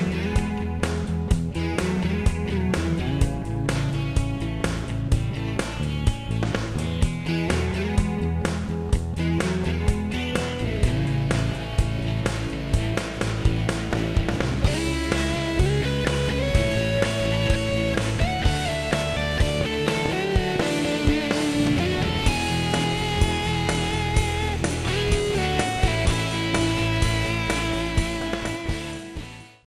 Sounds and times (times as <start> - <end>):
Music: 0.0 - 29.6.